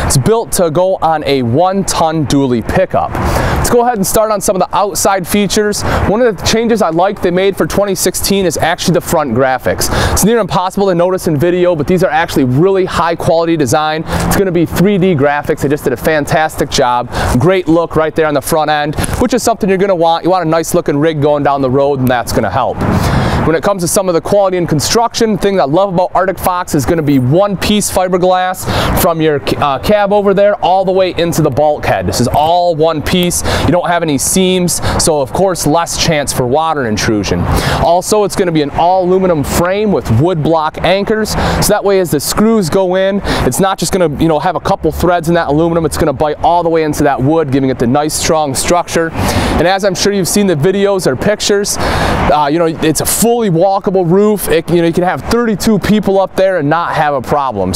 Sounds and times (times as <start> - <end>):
Speech: 0.0 - 22.8, 23.4 - 57.7.